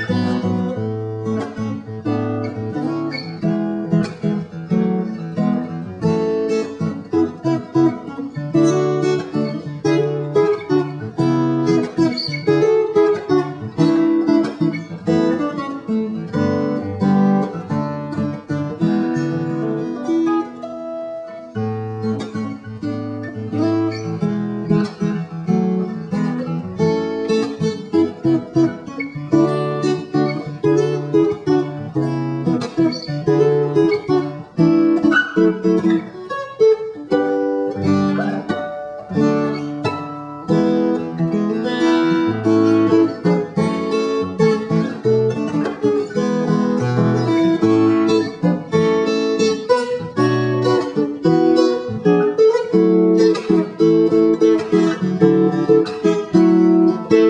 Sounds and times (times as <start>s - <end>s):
Music: 0.0s - 57.2s.